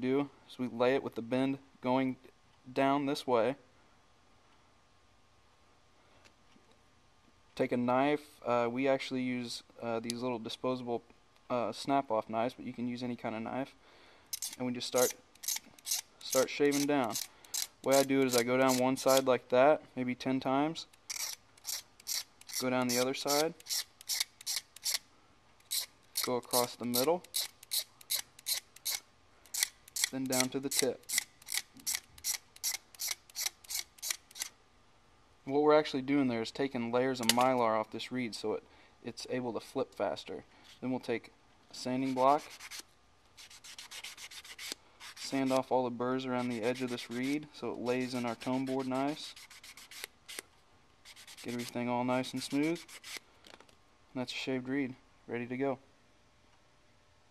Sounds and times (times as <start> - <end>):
Sanding: 21.1 - 25.0, 42.0 - 42.8, 43.4 - 45.6, 46.3 - 50.4, 51.1 - 51.7, 52.4 - 53.2
Rub: 42.0 - 45.6, 46.3 - 50.4, 51.0 - 53.2.